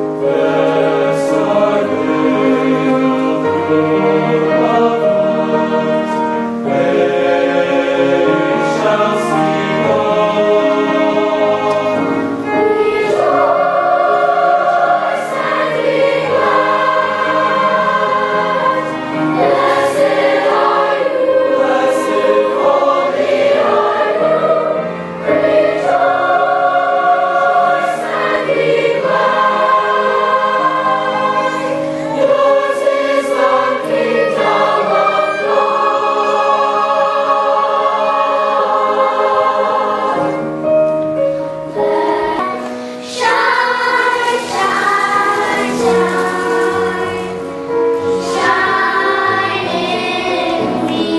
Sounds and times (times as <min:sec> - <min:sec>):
Choir: 0:00.0 - 0:51.1.